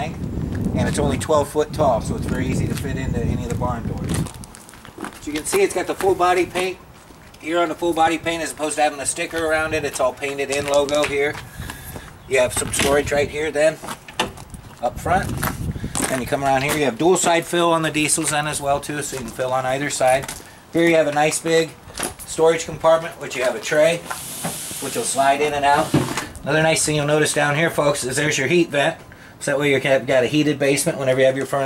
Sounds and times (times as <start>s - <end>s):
Speech: 0.8s - 4.2s, 5.2s - 6.8s, 7.4s - 11.4s, 12.3s - 13.8s, 14.8s - 15.4s, 16.0s - 24.0s, 24.8s - 31.6s
Walk, footsteps: 4.0s - 7.4s, 9.3s - 13.0s, 13.8s - 16.9s.